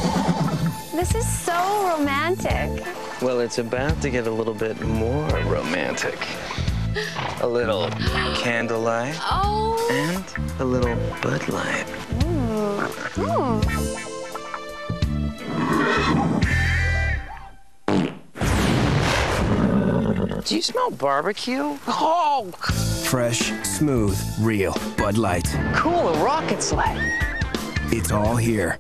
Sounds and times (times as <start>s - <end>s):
Music: 0.0s - 17.8s, 22.6s - 28.8s
Neigh, whinny: 15.4s - 17.2s, 27.0s - 28.0s
Speech: 27.9s - 28.8s.